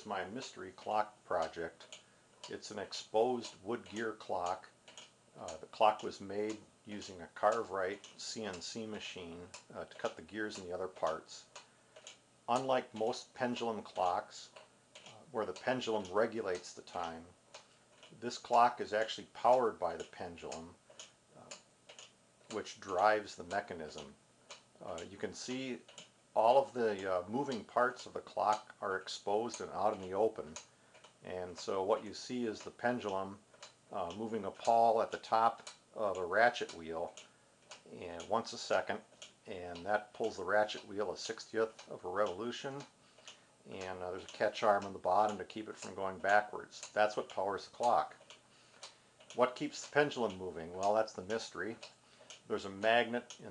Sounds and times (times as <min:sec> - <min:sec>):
Speech: 0:00.0 - 0:04.8, 0:05.4 - 0:11.6, 0:12.5 - 0:17.3, 0:18.2 - 0:20.8, 0:22.5 - 0:24.2, 0:24.8 - 0:42.9, 0:43.7 - 0:48.2, 0:49.3 - 0:51.9, 0:52.5 - 0:53.5
Tick-tock: 0:00.0 - 0:53.5.